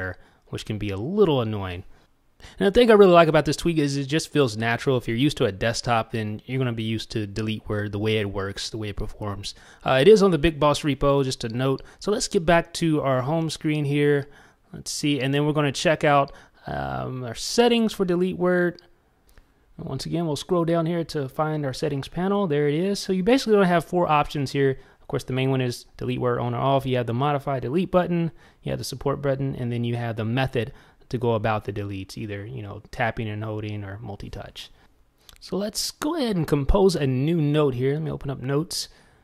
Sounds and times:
Speech: 0.0s - 1.9s, 2.5s - 18.9s, 19.8s - 39.0s
Inside, small room: 0.0s - 39.2s.

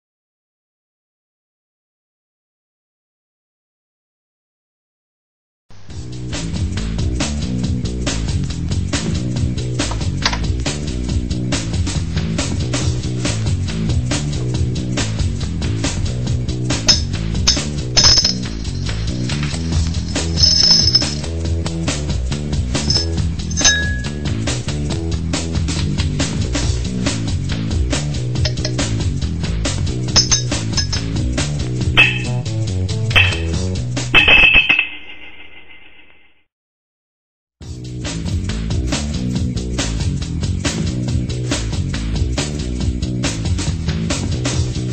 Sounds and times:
Dishes, pots, and pans: 33.2s - 33.6s.

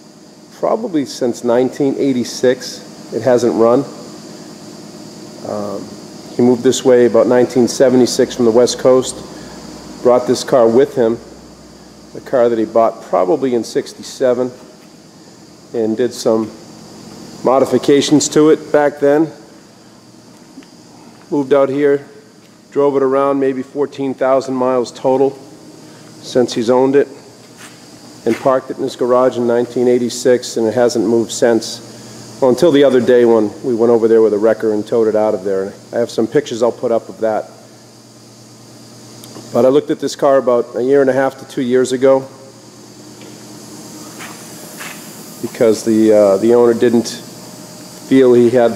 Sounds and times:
Speech: 0.5s - 4.0s, 5.4s - 9.3s, 10.0s - 11.3s, 12.2s - 14.6s, 15.7s - 16.6s, 17.4s - 19.4s, 21.3s - 25.4s, 26.2s - 27.2s, 28.2s - 37.6s, 39.5s - 42.4s, 45.4s - 47.3s, 48.1s - 48.7s.

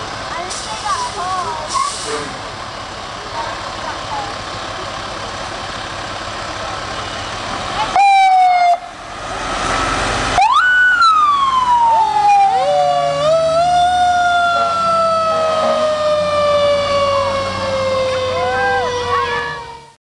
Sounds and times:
Fire engine, fire truck (siren): 6.8s - 20.0s.

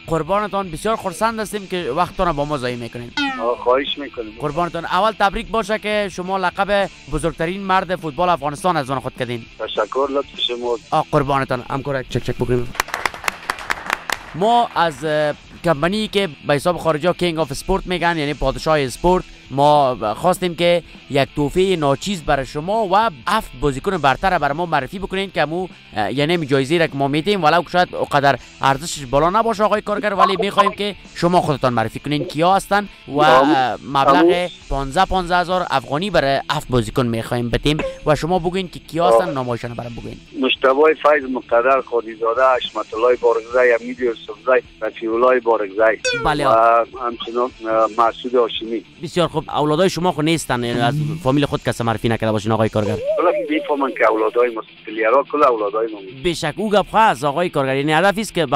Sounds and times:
Speech: 0.0s - 12.7s, 14.4s - 58.5s
Music: 0.0s - 58.5s.

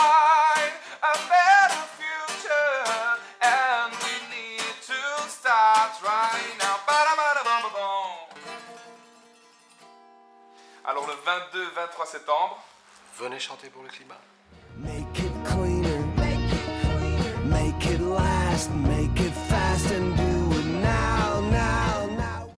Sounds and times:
Music: 0.0s - 11.0s, 14.6s - 22.5s
Speech: 10.8s - 14.3s.

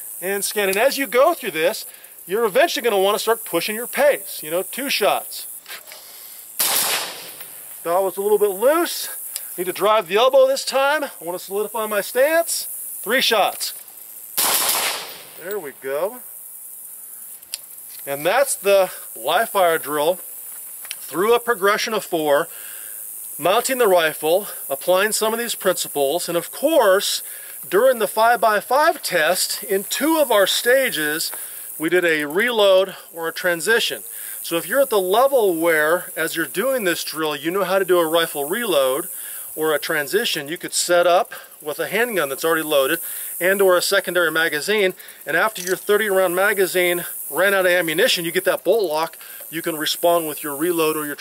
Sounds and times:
Gunshot, gunfire: 6.6s - 7.4s, 14.4s - 15.3s.

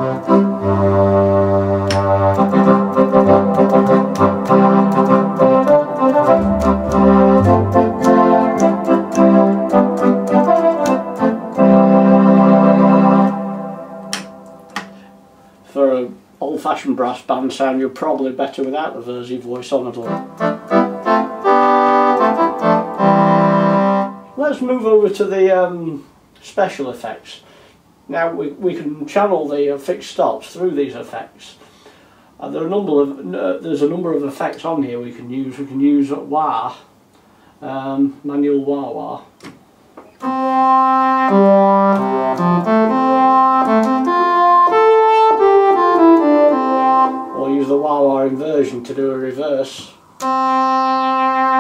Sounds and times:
Hammond organ: 0.0s - 15.1s, 20.0s - 24.5s, 40.1s - 48.8s, 50.2s - 51.6s
Piano: 1.8s - 14.9s
Speech: 15.7s - 20.2s, 24.4s - 27.5s, 28.1s - 31.6s, 32.4s - 36.9s, 37.6s - 39.3s, 47.4s - 50.0s.

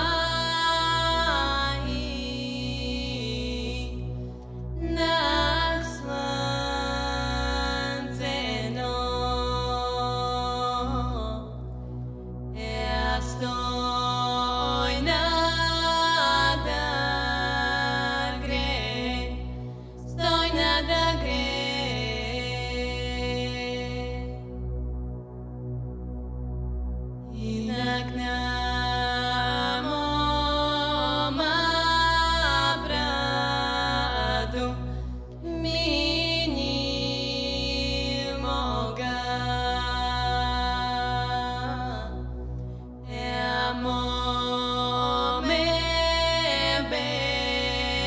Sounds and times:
Music: 0.0s - 48.0s.

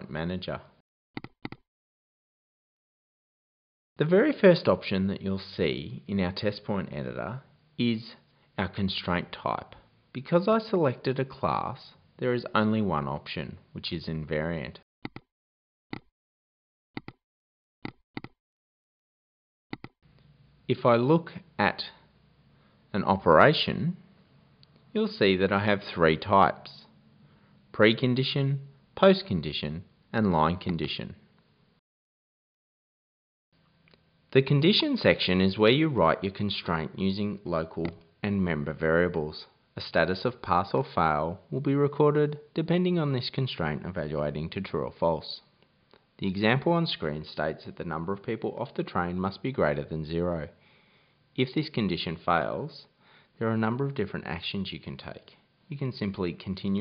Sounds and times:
Speech: 0.0s - 0.8s, 4.0s - 14.9s, 20.7s - 22.1s, 22.9s - 24.1s, 24.9s - 27.0s, 27.7s - 31.3s, 34.3s - 45.6s, 46.2s - 50.6s, 51.4s - 56.8s.

